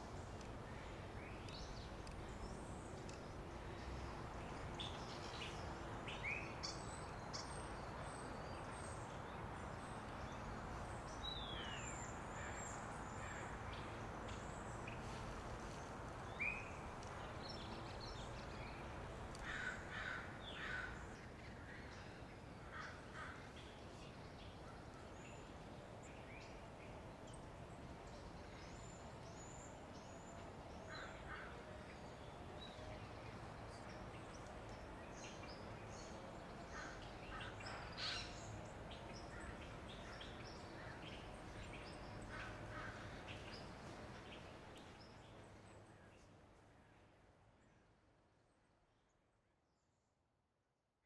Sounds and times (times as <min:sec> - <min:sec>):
Bird vocalization, bird call, bird song: 0:00.0 - 0:49.3.